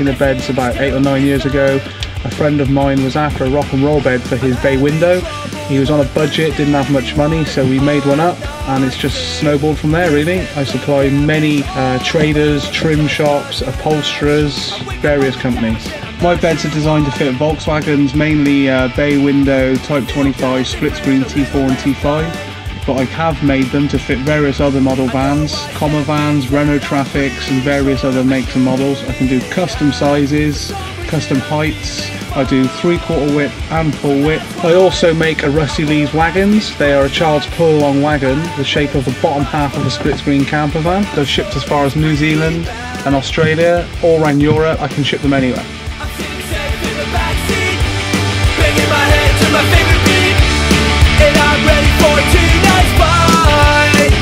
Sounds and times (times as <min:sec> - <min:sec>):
Speech: 0:00.0 - 0:45.7
Rock and roll: 0:00.0 - 0:54.2.